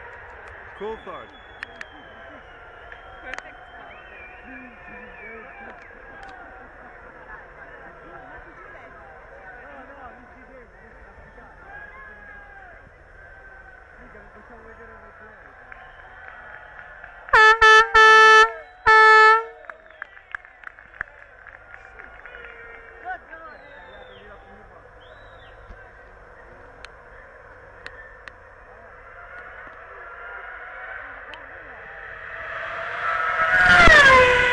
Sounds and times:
Outside, urban or manmade: 0.0s - 34.5s
Vehicle: 0.0s - 34.5s.

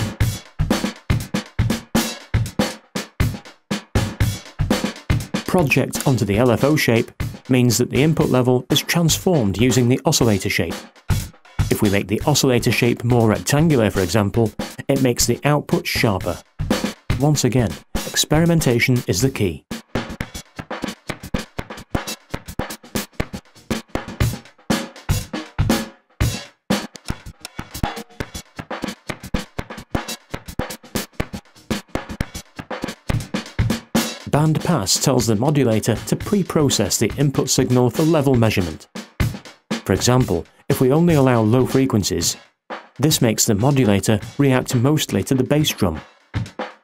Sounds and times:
Music: 0.0s - 46.8s
Speech: 5.5s - 10.8s, 11.7s - 16.4s, 17.2s - 19.6s, 34.3s - 38.8s, 39.9s - 42.4s, 43.0s - 46.0s.

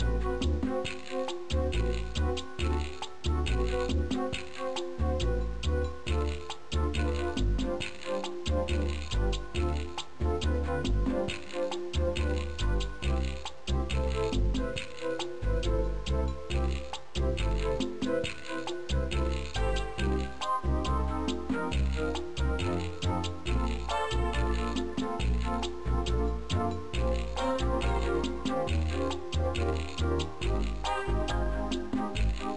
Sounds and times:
Video game music: 0.0s - 32.5s.

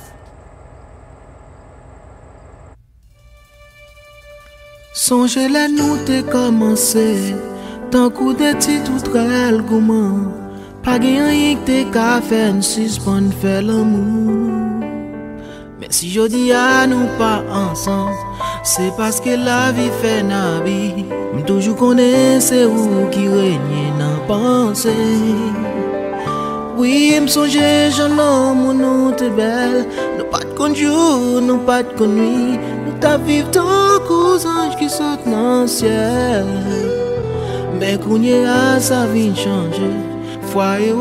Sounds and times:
Music: 3.0s - 41.0s.

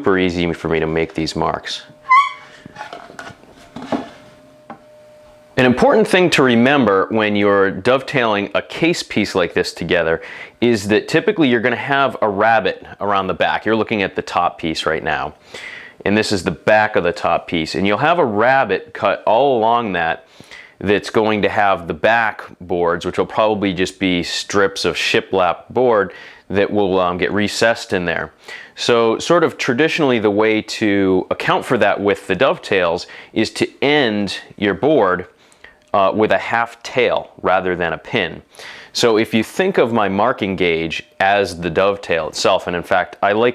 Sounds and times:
Speech: 0.0s - 2.0s, 5.6s - 15.4s, 16.0s - 43.5s.

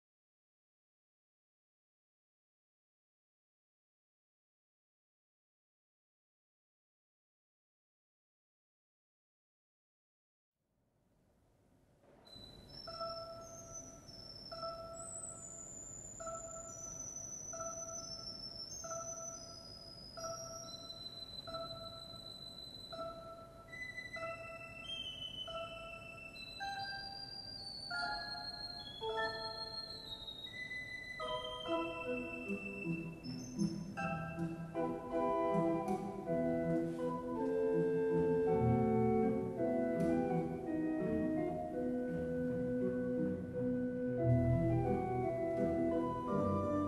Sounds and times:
Piano: 12.3s - 46.8s.

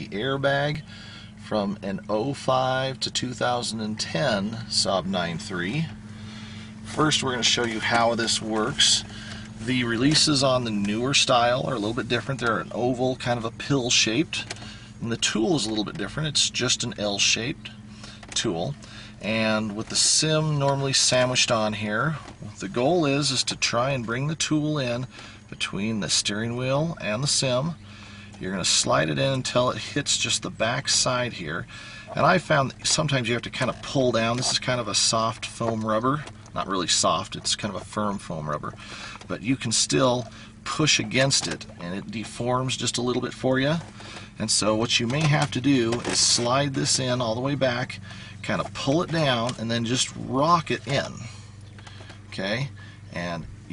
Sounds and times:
Speech: 0.0s - 0.8s, 1.4s - 6.0s, 6.9s - 27.8s, 28.4s - 51.3s, 52.3s - 53.7s.

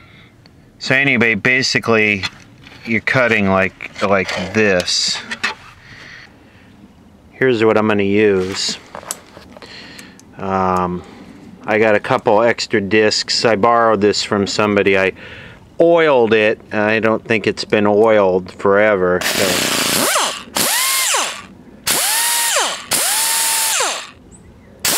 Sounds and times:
Speech: 0.8s - 2.3s, 2.9s - 5.4s, 7.4s - 8.8s, 10.4s - 11.1s, 11.7s - 15.2s, 15.8s - 19.7s
Power tool: 19.2s - 24.2s.

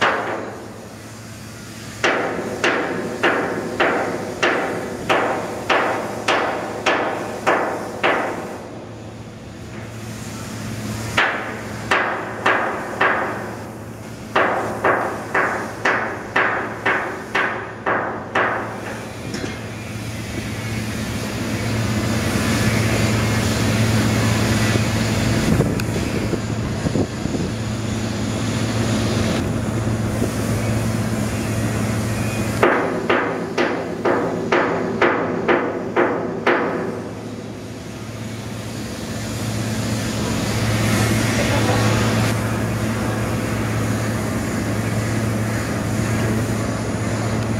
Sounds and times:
Ship: 0.0s - 47.5s
Hammer: 2.0s - 8.4s, 11.2s - 13.4s, 14.4s - 18.6s, 32.6s - 37.0s.

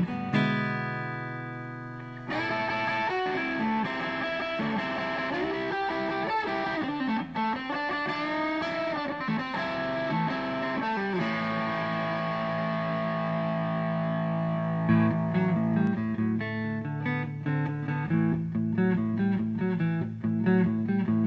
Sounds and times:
Music: 0.0s - 21.2s.

